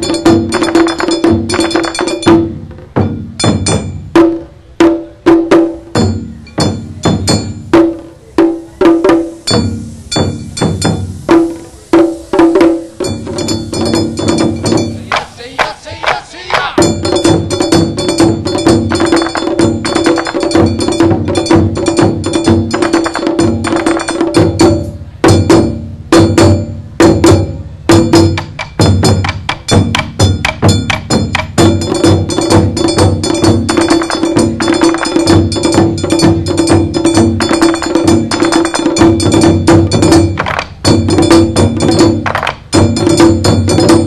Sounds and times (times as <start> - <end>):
Music: 0.0 - 44.0.